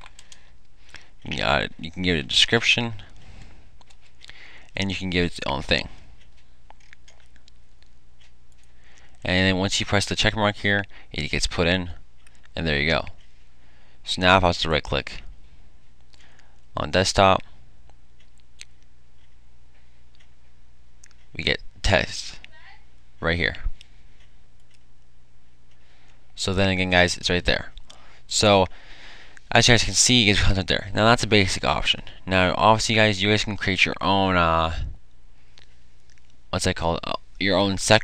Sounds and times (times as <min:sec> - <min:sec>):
Speech: 0:01.2 - 0:03.1, 0:04.8 - 0:06.0, 0:09.2 - 0:12.0, 0:12.6 - 0:13.2, 0:14.1 - 0:15.3, 0:16.8 - 0:17.5, 0:21.3 - 0:23.8, 0:26.4 - 0:28.7, 0:29.5 - 0:35.0, 0:36.5 - 0:38.0.